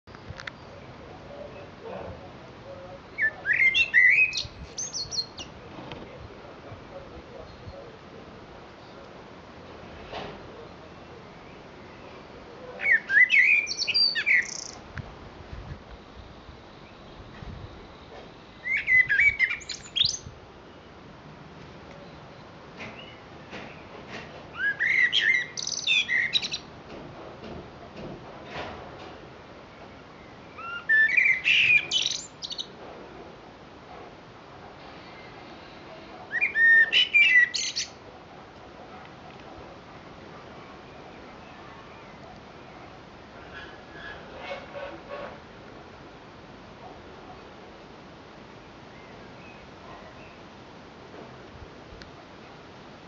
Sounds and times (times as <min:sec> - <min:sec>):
Speech: 0:00.8 - 0:03.7, 0:05.9 - 0:09.2.